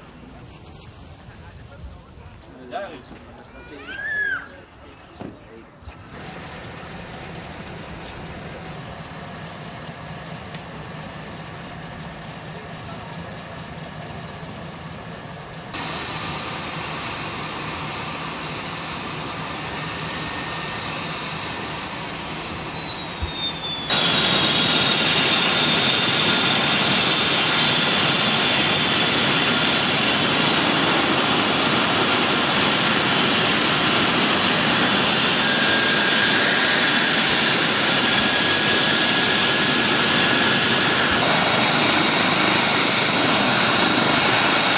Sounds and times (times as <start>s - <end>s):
Helicopter: 6.1s - 44.7s.